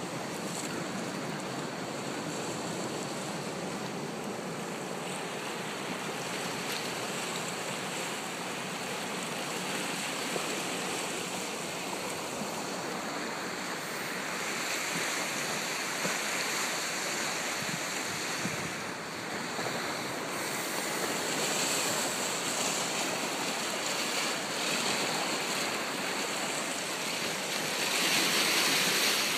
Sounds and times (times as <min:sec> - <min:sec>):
Wind: 0:00.0 - 0:29.3.